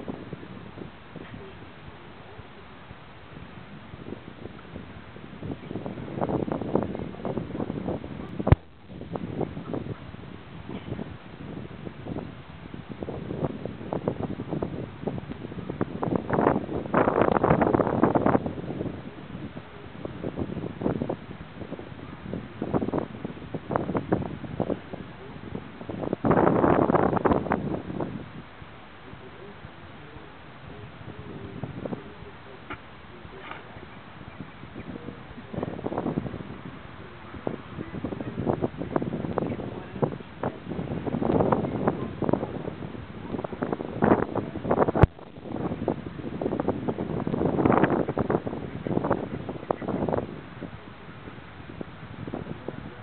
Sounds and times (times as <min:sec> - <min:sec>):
Speech: 0:29.1 - 0:34.0, 0:39.5 - 0:40.7, 0:41.4 - 0:44.6.